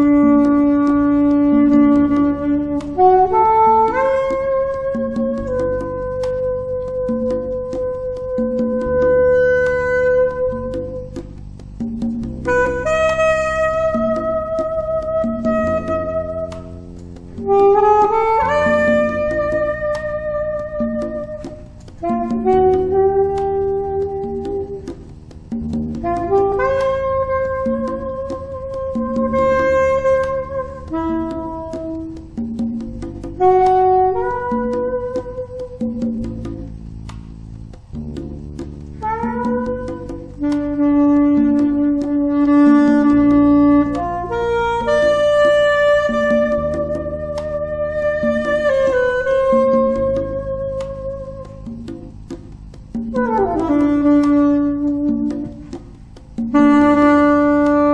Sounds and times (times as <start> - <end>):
Music: 0.0 - 57.9.